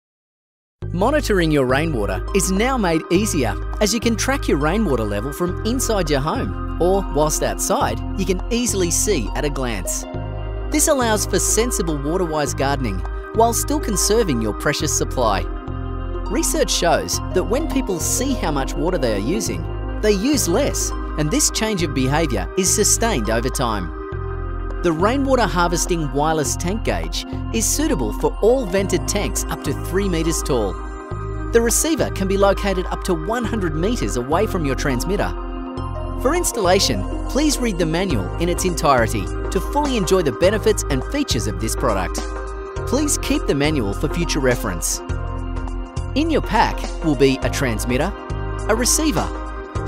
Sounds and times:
Music: 0:00.8 - 0:49.8
Speech: 0:00.9 - 0:10.1, 0:10.8 - 0:15.5, 0:16.3 - 0:23.9, 0:24.8 - 0:30.8, 0:31.6 - 0:35.4, 0:36.2 - 0:42.2, 0:42.9 - 0:45.0, 0:46.2 - 0:49.4.

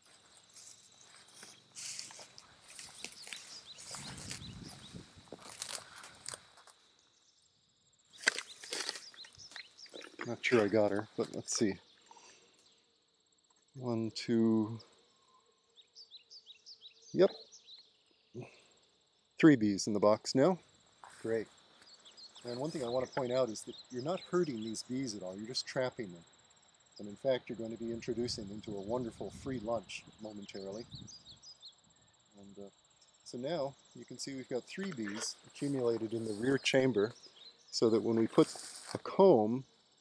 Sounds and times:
Walk, footsteps: 0:00.0 - 0:06.8
Outside, rural or natural: 0:00.0 - 0:40.0
Speech: 0:10.2 - 0:11.8, 0:13.8 - 0:14.8, 0:17.2 - 0:17.4, 0:18.4 - 0:18.6, 0:19.4 - 0:20.6, 0:21.2 - 0:21.5, 0:22.4 - 0:26.2, 0:27.0 - 0:30.9, 0:32.4 - 0:32.7, 0:33.3 - 0:37.2, 0:37.8 - 0:39.6.

